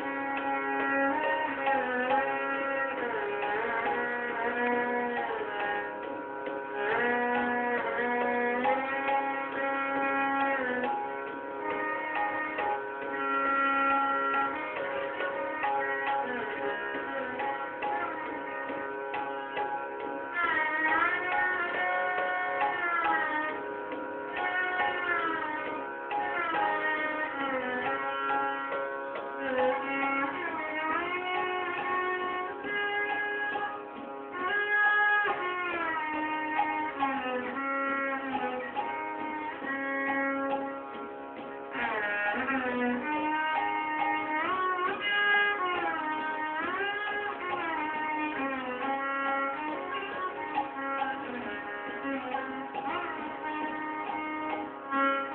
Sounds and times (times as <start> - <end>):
Violin, fiddle: 0.0 - 55.3.